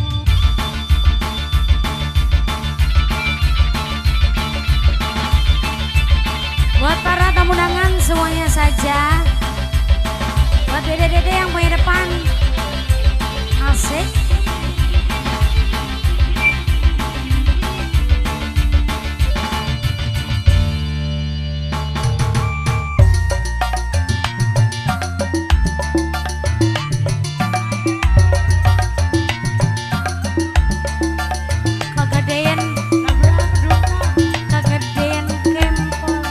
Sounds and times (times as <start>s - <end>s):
Speech: 6.8s - 9.3s, 10.7s - 12.4s, 13.6s - 14.2s, 32.0s - 36.3s.